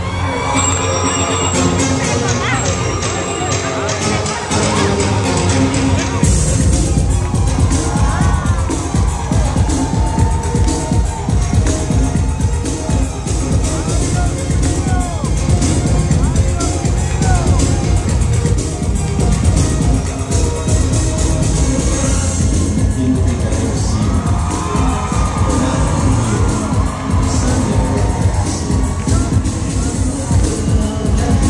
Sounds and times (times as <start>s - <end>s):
Music: 0.0s - 31.5s.